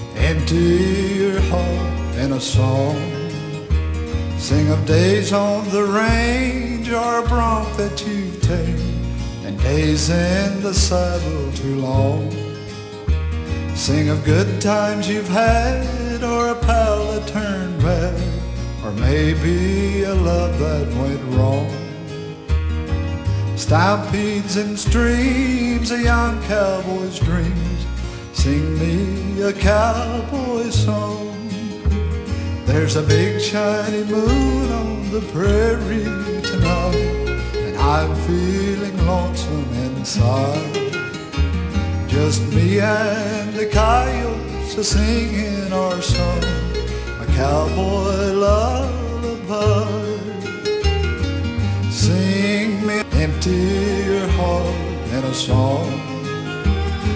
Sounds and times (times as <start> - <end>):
Music: 0.0 - 57.1.